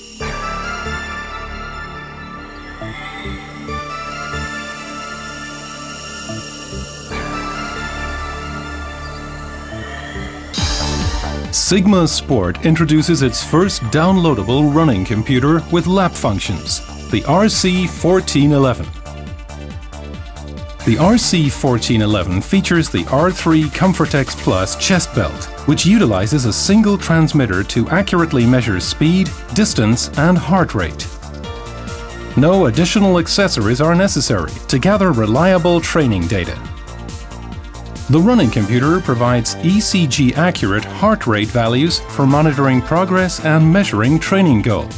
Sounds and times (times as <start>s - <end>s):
Music: 0.0s - 44.9s
Speech: 11.5s - 19.0s, 20.8s - 31.1s, 32.4s - 36.6s, 38.1s - 44.9s.